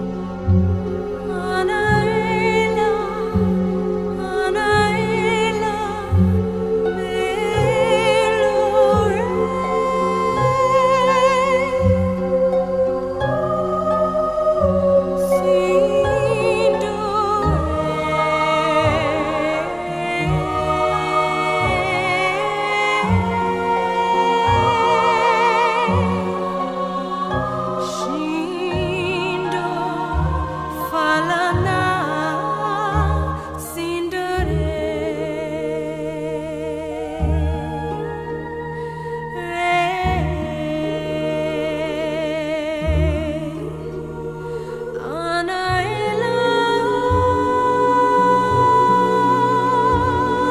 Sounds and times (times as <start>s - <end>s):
Music: 0.0s - 50.5s
Female singing: 1.2s - 12.4s, 13.2s - 38.0s, 39.4s - 50.5s.